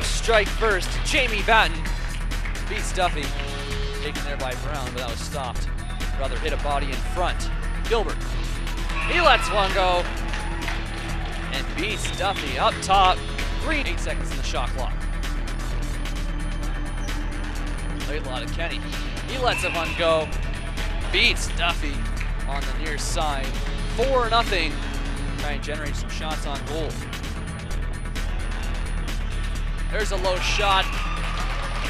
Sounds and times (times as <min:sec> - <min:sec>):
Speech: 0:00.0 - 0:01.9, 0:02.7 - 0:03.3, 0:04.0 - 0:08.2, 0:09.1 - 0:10.0, 0:11.5 - 0:14.9, 0:18.1 - 0:20.3, 0:21.1 - 0:24.8, 0:25.4 - 0:27.0, 0:29.9 - 0:30.9
Music: 0:00.0 - 0:31.8.